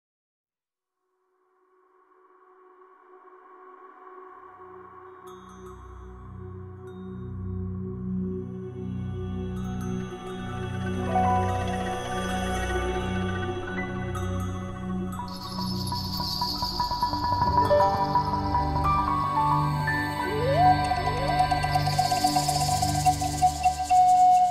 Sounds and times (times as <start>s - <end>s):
Ambient music: 2.8s - 24.5s.